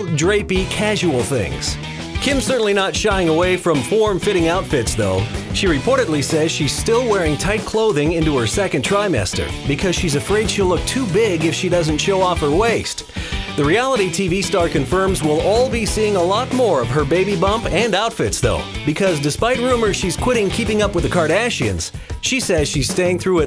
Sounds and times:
Music: 0.0 - 23.4
Speech: 0.0 - 23.4.

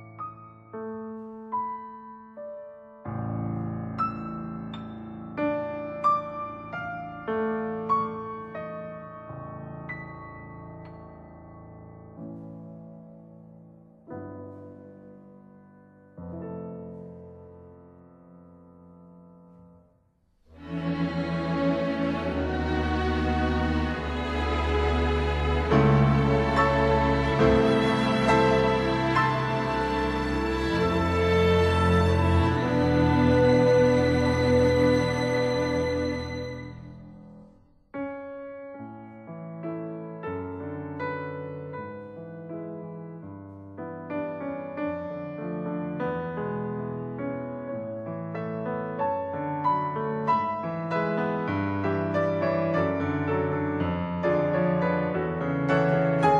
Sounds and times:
Music: 0.0 - 56.4.

